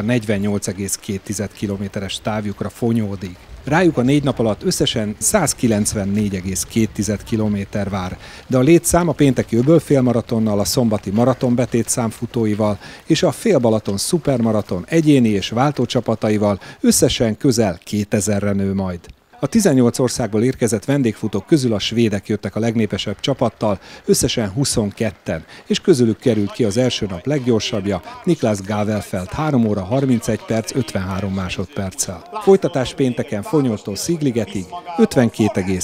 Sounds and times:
Run: 0:00.0 - 0:17.9, 0:19.0 - 0:35.8
Outside, urban or manmade: 0:00.0 - 0:35.8
Speech: 0:00.0 - 0:35.8.

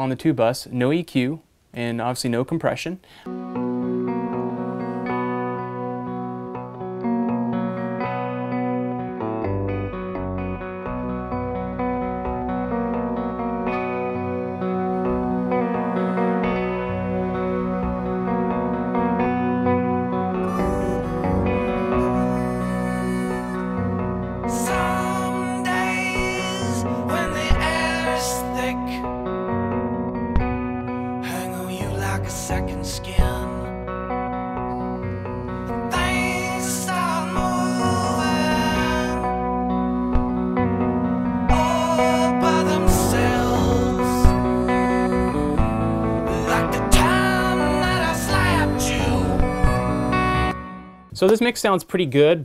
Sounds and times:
Distortion: 0:00.0 - 0:52.4
Effects unit: 0:03.1 - 0:51.4
Musical instrument: 0:03.3 - 0:51.4.

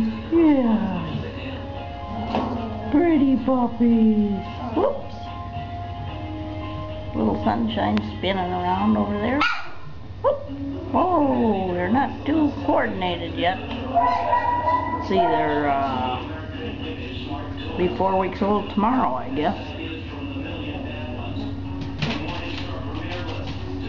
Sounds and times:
Speech: 0:10.3 - 0:23.8
Canidae, dogs, wolves: 0:13.9 - 0:15.9
Dog: 0:14.0 - 0:15.4.

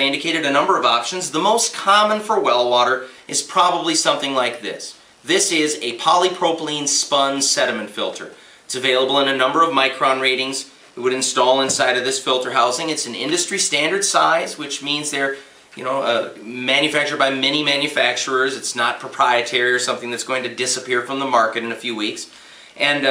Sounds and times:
Speech: 0:00.0 - 0:23.1.

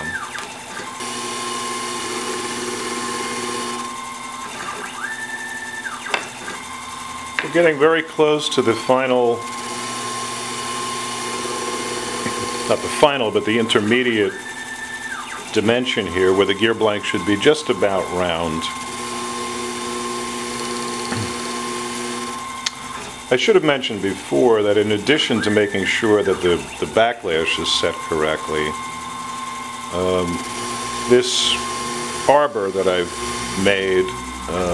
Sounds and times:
Speech: 0:07.4 - 0:09.4, 0:12.7 - 0:14.4, 0:15.6 - 0:18.8, 0:23.3 - 0:28.8, 0:29.9 - 0:30.4, 0:31.1 - 0:31.7, 0:32.3 - 0:34.7.

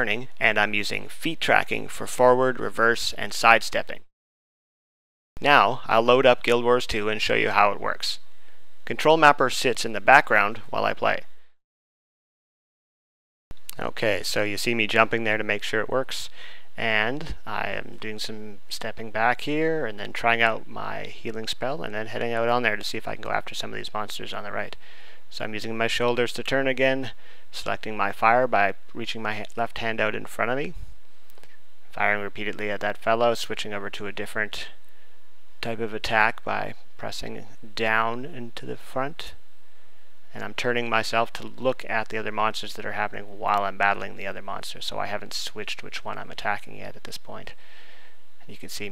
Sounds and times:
Speech: 0:00.0 - 0:04.1, 0:05.4 - 0:08.2, 0:08.9 - 0:11.3, 0:13.7 - 0:30.8, 0:31.9 - 0:34.8, 0:35.6 - 0:39.4, 0:40.3 - 0:47.6, 0:48.4 - 0:48.9.

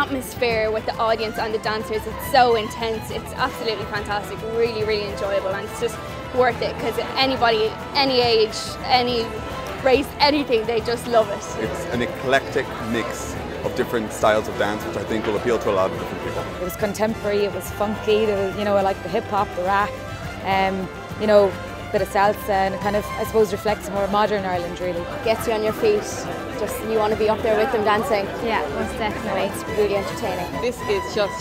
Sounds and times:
Music: 0:00.0 - 0:31.4.

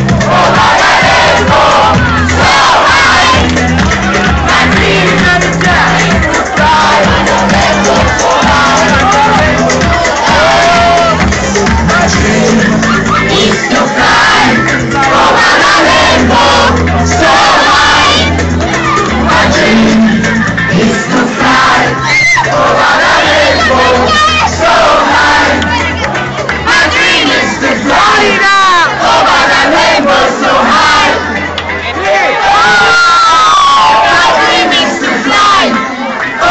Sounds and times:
Music: 0:00.0 - 0:36.5.

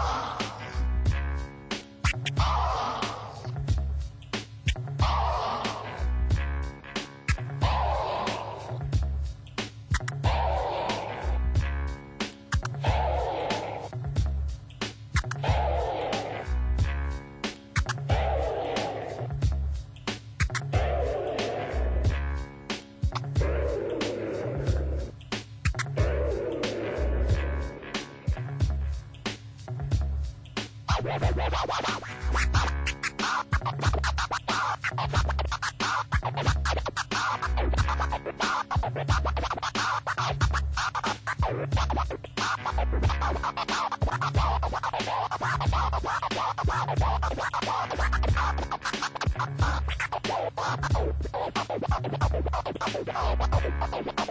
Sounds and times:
Electronic music: 0:00.0 - 0:54.3
Scratching (performance technique): 0:00.0 - 0:54.3.

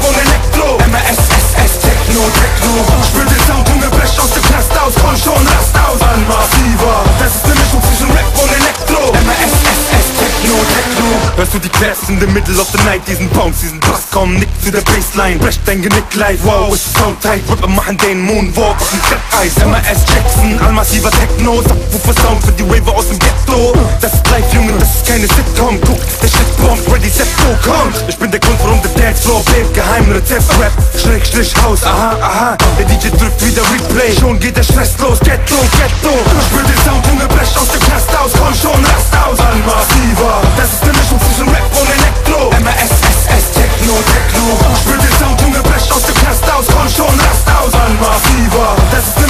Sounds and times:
Techno: 0:00.0 - 0:49.2.

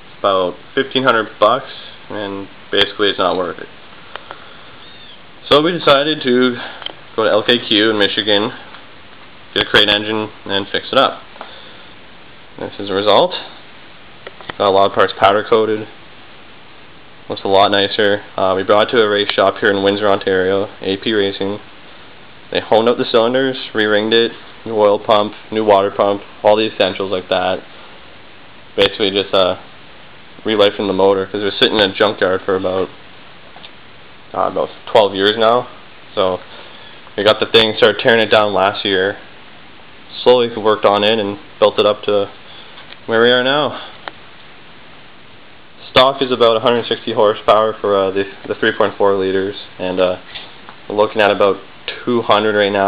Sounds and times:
Speech: 0:00.2 - 0:03.8, 0:05.4 - 0:08.7, 0:09.6 - 0:11.3, 0:12.6 - 0:13.6, 0:14.5 - 0:16.0, 0:17.3 - 0:21.7, 0:22.5 - 0:27.7, 0:28.8 - 0:29.7, 0:30.4 - 0:33.0, 0:34.3 - 0:36.5, 0:37.2 - 0:39.3, 0:40.1 - 0:42.4, 0:43.1 - 0:44.0, 0:45.8 - 0:50.2, 0:50.9 - 0:52.8.

